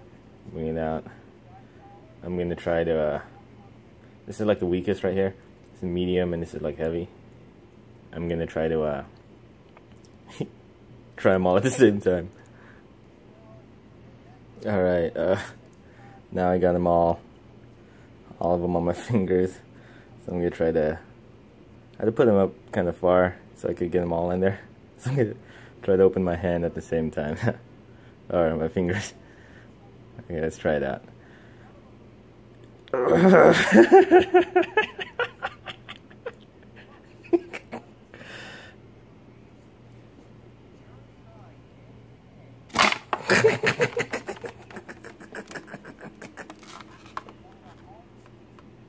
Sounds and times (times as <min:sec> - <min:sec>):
Inside, small room: 0:00.0 - 0:48.8.